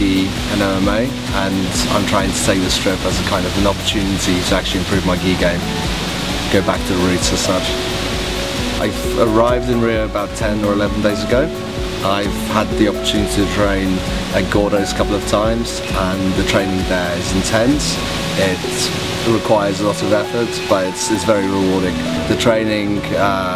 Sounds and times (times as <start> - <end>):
Speech: 0.0 - 5.6, 6.5 - 7.8, 8.8 - 23.5
Music: 0.0 - 23.5.